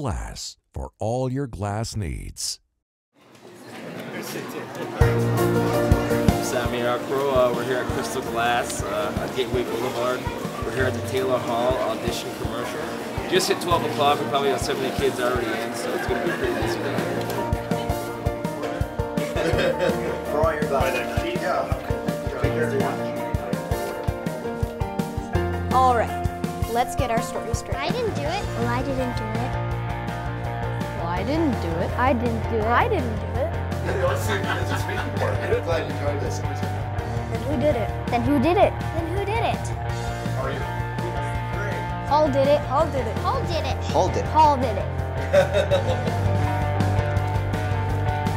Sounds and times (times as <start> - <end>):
Music: 4.8 - 48.3.